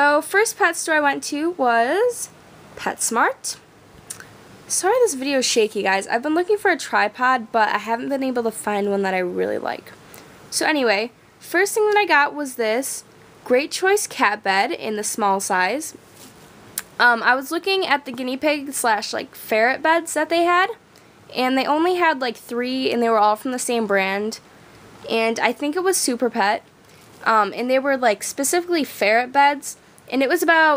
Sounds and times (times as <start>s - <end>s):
Speech: 0.0s - 3.6s, 4.7s - 16.0s, 16.8s - 24.4s, 25.0s - 26.6s, 27.2s - 30.7s.